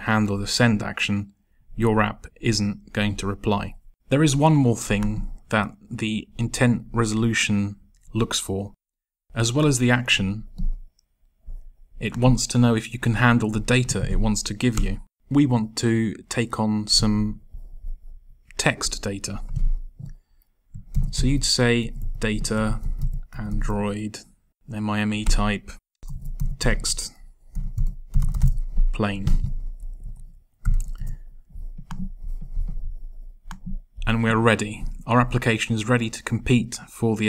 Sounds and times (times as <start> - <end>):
Speech: 0.0 - 10.5, 12.0 - 17.4, 18.5 - 19.6, 21.1 - 25.8, 26.6 - 27.2, 28.9 - 29.5, 34.0 - 37.2.